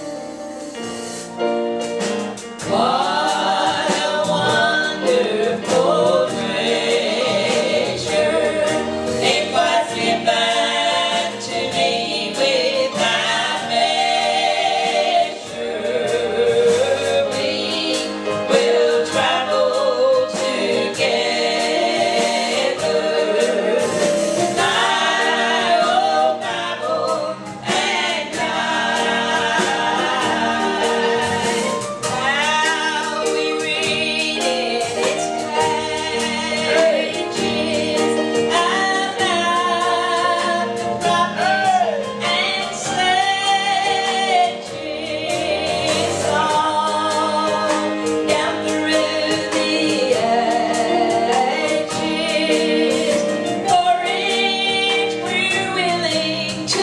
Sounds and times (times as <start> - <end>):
Gospel music: 0.0 - 56.8.